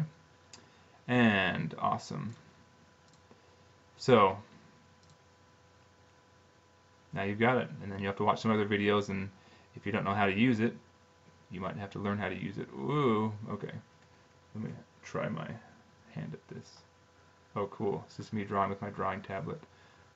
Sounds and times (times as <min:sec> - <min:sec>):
Inside, small room: 0:00.0 - 0:20.1
Speech: 0:01.1 - 0:02.4, 0:04.0 - 0:04.5, 0:07.1 - 0:10.9, 0:11.5 - 0:13.9, 0:14.5 - 0:16.9, 0:17.5 - 0:19.7.